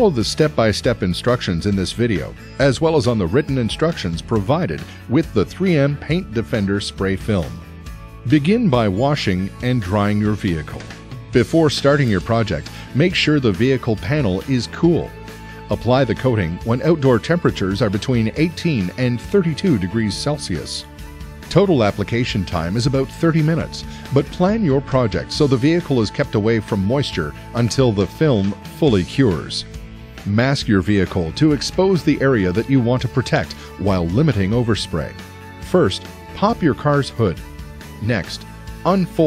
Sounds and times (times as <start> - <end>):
Speech: 0.0 - 7.6, 8.3 - 15.1, 15.7 - 20.8, 21.5 - 37.4, 38.0 - 39.2
Music: 0.0 - 39.2.